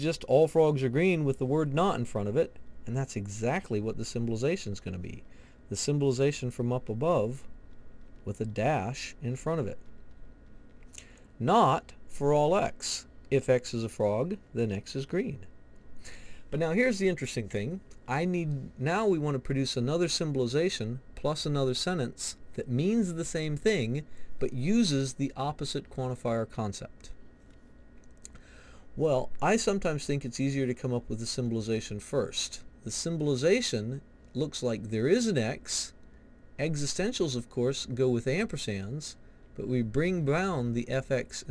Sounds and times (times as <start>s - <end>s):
Narration, monologue: 0.0s - 41.5s.